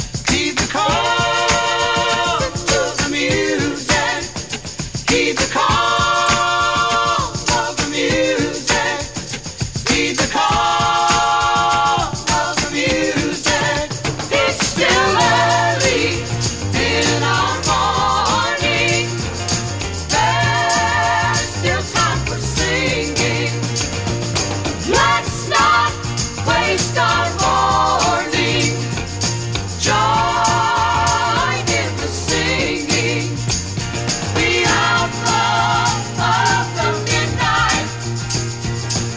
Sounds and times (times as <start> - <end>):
Jingle bell: 0.0 - 39.1.